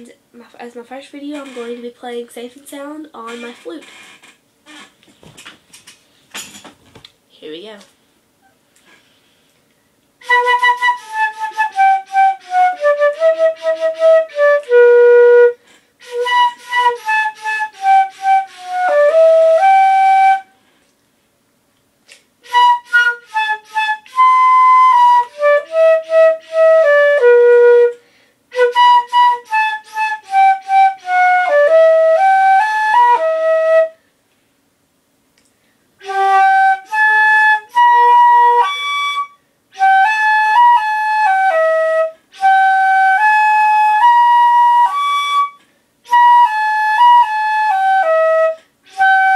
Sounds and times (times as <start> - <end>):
Flute: 10.2 - 20.6, 22.4 - 34.0, 36.0 - 49.3.